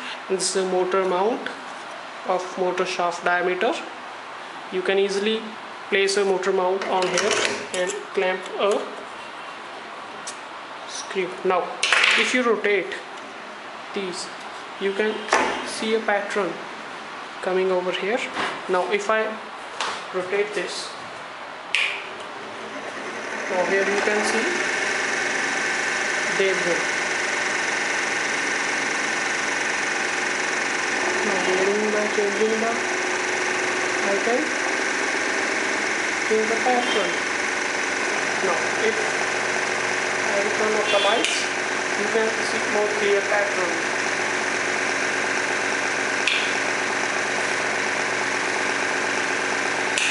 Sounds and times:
Speech: 0.3s - 1.6s, 2.3s - 3.9s, 4.8s - 9.0s, 10.9s - 13.1s, 13.9s - 16.6s, 17.4s - 19.4s, 20.1s - 21.0s, 23.5s - 24.6s, 26.3s - 26.9s, 31.2s - 32.8s, 34.0s - 34.6s, 36.3s - 37.2s, 38.4s - 39.1s, 40.3s - 43.9s.

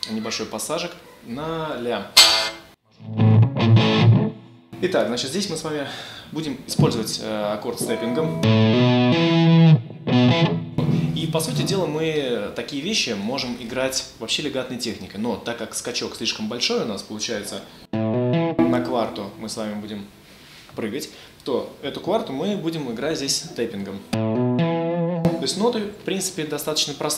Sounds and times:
Speech: 0.0s - 2.2s, 4.8s - 8.4s, 11.1s - 17.7s, 18.6s - 20.1s, 20.8s - 24.2s, 25.3s - 27.1s
Distortion: 2.2s - 5.8s, 6.4s - 14.2s, 17.3s - 20.5s, 21.8s - 26.5s
Music: 3.0s - 4.6s, 7.8s - 12.0s, 17.9s - 19.6s, 24.1s - 25.6s.

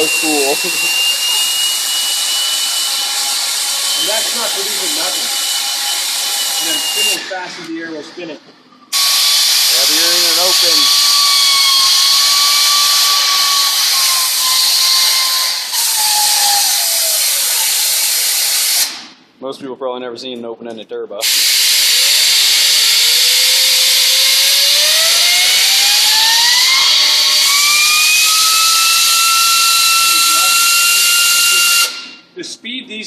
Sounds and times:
Speech: 0.0s - 0.9s, 4.0s - 5.3s, 6.6s - 8.4s, 9.8s - 10.8s, 19.4s - 21.2s, 32.4s - 33.0s
Drill: 0.0s - 7.4s, 8.9s - 19.0s, 21.2s - 32.2s.

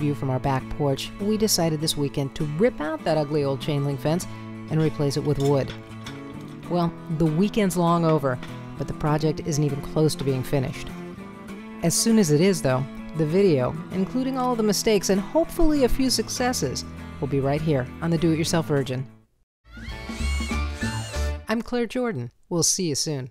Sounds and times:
Speech: 0.0s - 5.7s, 6.7s - 10.9s, 11.8s - 19.1s, 21.5s - 23.3s
Music: 0.0s - 21.6s.

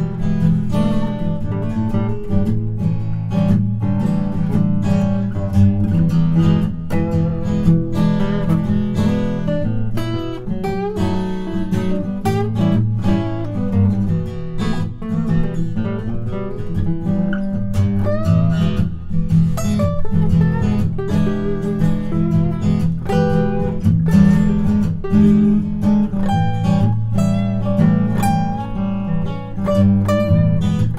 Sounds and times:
Acoustic guitar: 0.0s - 30.9s
Strum: 0.0s - 30.9s.

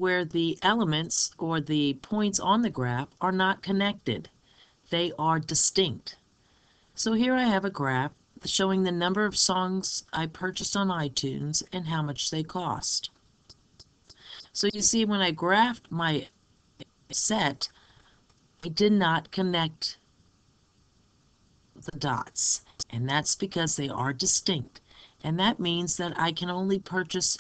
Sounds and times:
Speech: 0.0s - 4.3s, 4.9s - 6.2s, 7.0s - 13.2s, 14.1s - 16.4s, 17.1s - 17.8s, 18.6s - 20.0s, 21.8s - 27.4s.

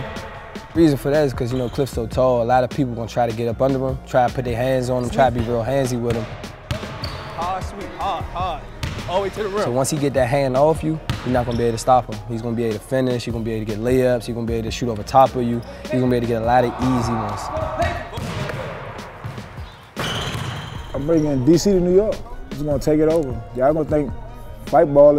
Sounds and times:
Music: 0.0s - 25.1s.

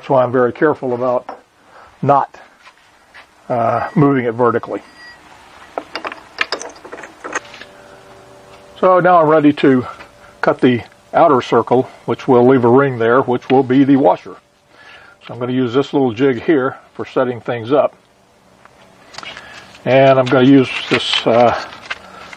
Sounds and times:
Speech: 0.0s - 1.4s, 2.0s - 2.5s, 3.5s - 4.8s, 8.8s - 14.4s, 15.2s - 18.0s, 19.8s - 21.8s
Tools: 5.8s - 7.5s.

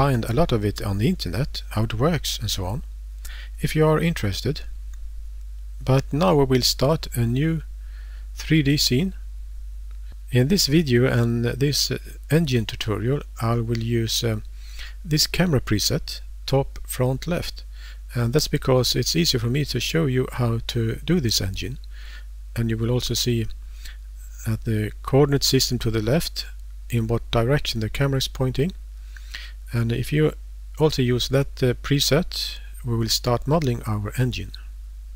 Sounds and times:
Speech: 0.0s - 2.9s, 3.6s - 4.7s, 5.8s - 7.7s, 8.4s - 9.2s, 10.3s - 21.8s, 22.6s - 23.6s, 24.3s - 28.8s, 29.7s - 34.7s.

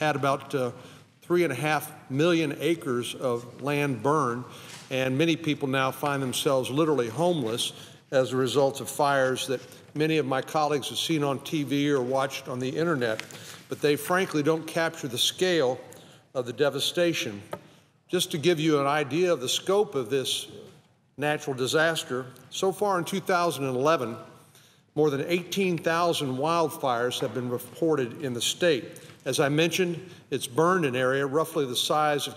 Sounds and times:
Male speech, man speaking: 0.0s - 15.8s, 16.4s - 17.5s, 18.1s - 24.3s, 25.0s - 32.3s
Narration, monologue: 0.0s - 32.3s.

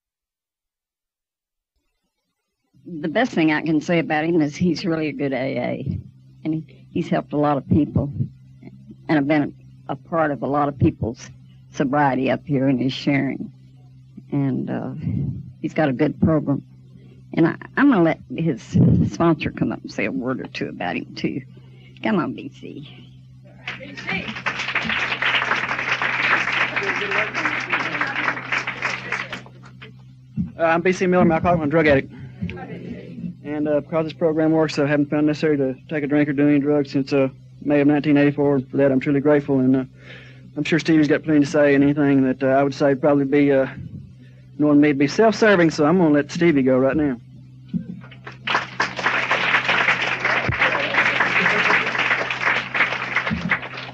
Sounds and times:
Male speech, man speaking: 26.7s - 28.2s, 30.6s - 39.9s, 40.6s - 43.9s, 44.6s - 47.2s.

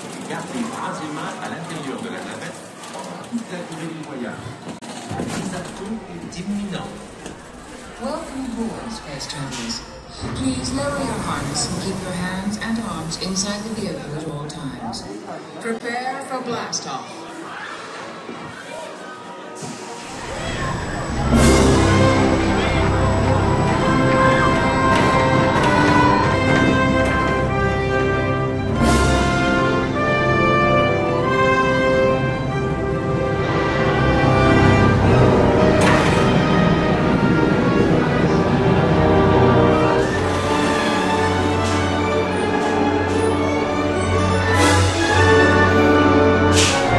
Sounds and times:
Music: 20.1s - 46.9s.

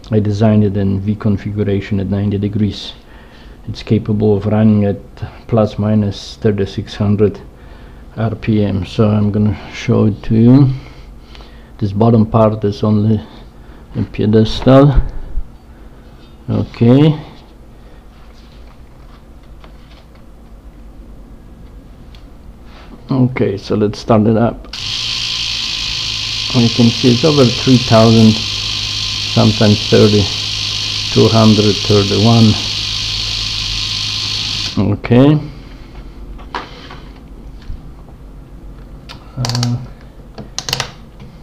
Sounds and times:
Speech: 0.1s - 3.0s, 3.7s - 7.4s, 8.2s - 10.8s, 11.8s - 13.4s, 14.0s - 15.1s, 16.5s - 17.4s, 23.1s - 24.7s, 26.5s - 28.4s, 29.4s - 30.3s, 31.1s - 32.7s, 34.8s - 35.5s, 39.3s - 40.0s.

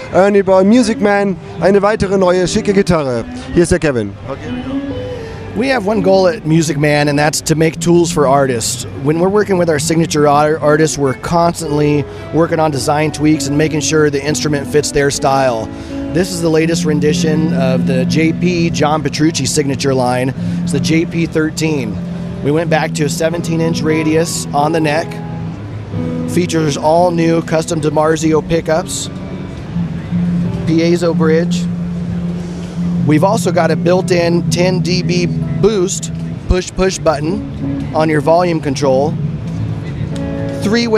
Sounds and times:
Speech: 0.0s - 4.6s, 5.6s - 25.2s, 26.4s - 29.1s, 30.7s - 31.7s, 33.1s - 37.4s, 38.0s - 39.1s, 40.6s - 40.9s
Music: 0.0s - 40.9s.

